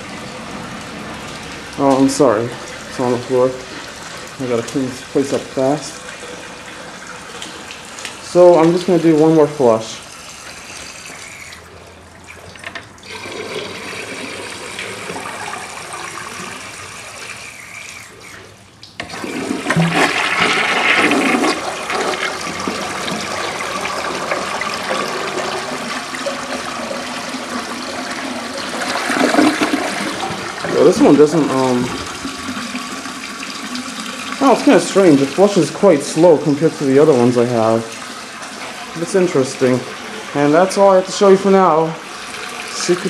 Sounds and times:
Toilet flush: 0.0s - 43.0s
Water: 0.0s - 43.0s.

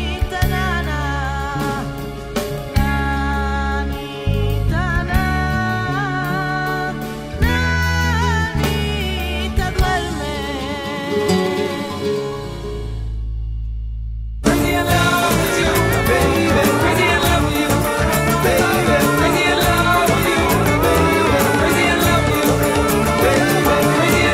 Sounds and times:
Flamenco: 0.0s - 13.4s, 14.4s - 24.3s.

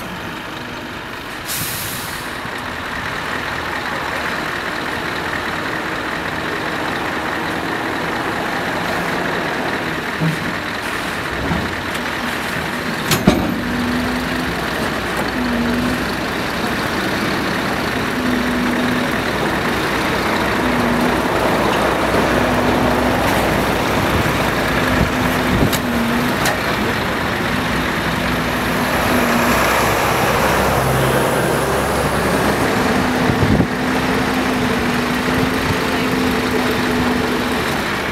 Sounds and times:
Truck: 0.0s - 38.1s.

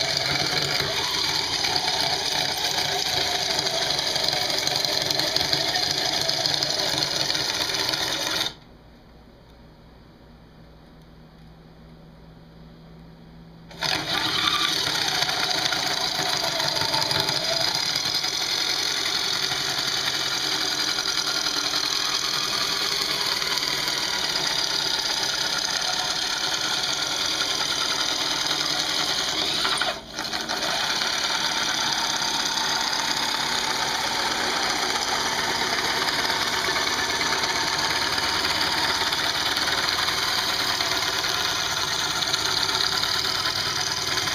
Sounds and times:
Wood: 13.7s - 44.3s.

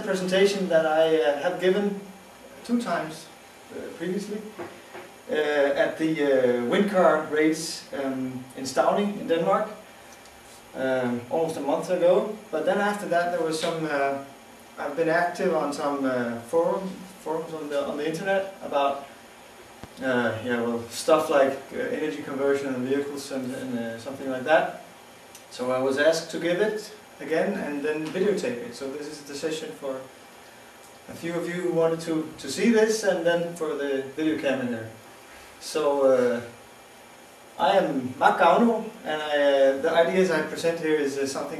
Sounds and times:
Speech: 0.0s - 4.7s, 5.3s - 9.8s, 10.8s - 19.1s, 20.0s - 24.9s, 25.5s - 30.1s, 31.1s - 35.0s, 35.6s - 36.6s, 37.6s - 41.5s.

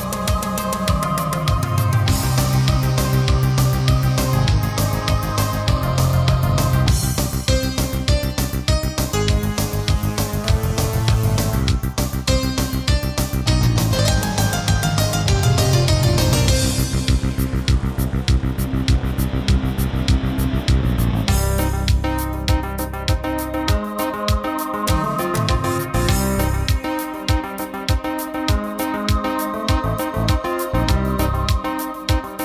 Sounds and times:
Music: 0.0s - 32.4s.

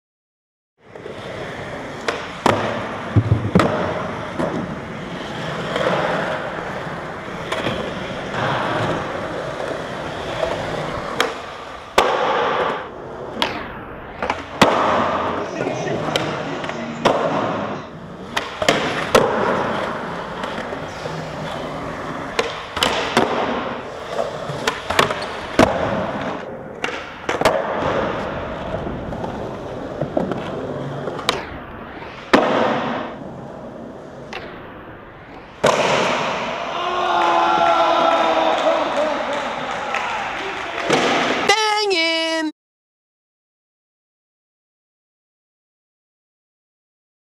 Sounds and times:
Skateboard: 0.8s - 41.5s.

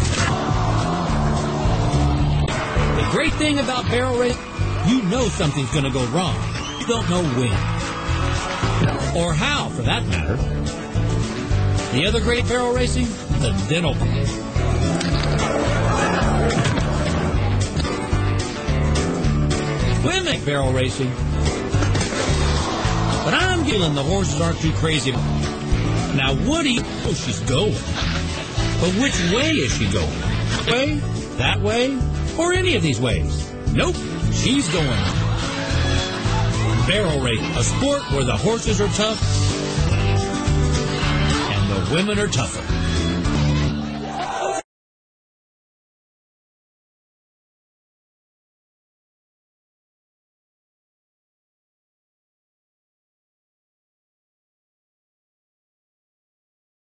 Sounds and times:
Music: 0.0s - 44.7s
Speech: 3.0s - 7.6s, 9.1s - 10.4s, 11.9s - 14.0s, 20.0s - 21.2s, 23.2s - 25.2s, 26.1s - 27.8s, 28.8s - 35.1s, 36.8s - 39.2s, 41.5s - 42.6s.

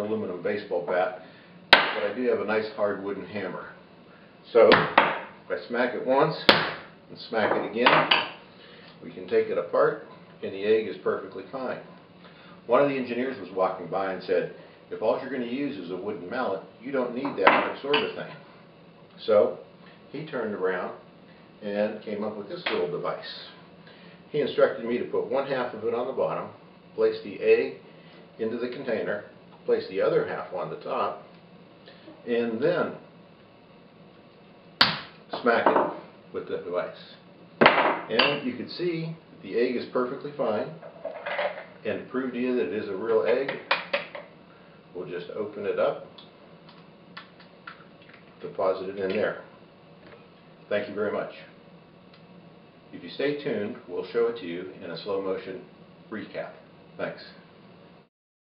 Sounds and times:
Speech: 0.0s - 1.2s, 2.0s - 3.8s, 4.5s - 8.1s, 9.0s - 11.9s, 12.7s - 18.4s, 19.2s - 21.0s, 21.6s - 23.6s, 24.3s - 27.8s, 28.4s - 31.3s, 32.2s - 33.1s, 35.3s - 37.3s, 38.1s - 40.8s, 41.8s - 43.7s, 45.0s - 46.2s, 48.4s - 49.5s, 50.7s - 51.6s, 52.9s - 57.5s.

